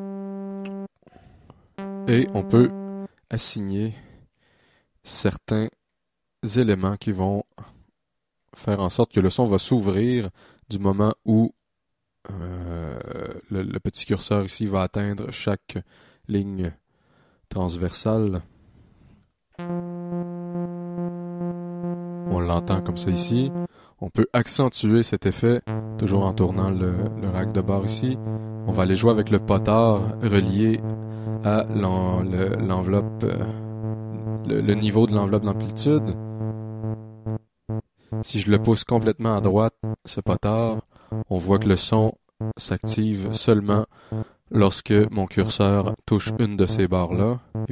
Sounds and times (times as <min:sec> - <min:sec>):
Electronic music: 0:00.0 - 0:00.9, 0:01.8 - 0:03.1, 0:19.6 - 0:23.7, 0:25.7 - 0:41.7, 0:42.4 - 0:44.3, 0:45.3 - 0:47.7
Speech: 0:02.1 - 0:04.0, 0:05.1 - 0:05.8, 0:06.4 - 0:07.7, 0:08.6 - 0:11.6, 0:12.3 - 0:16.8, 0:17.5 - 0:18.5, 0:22.3 - 0:33.6, 0:34.2 - 0:36.2, 0:38.2 - 0:43.9, 0:44.5 - 0:47.5.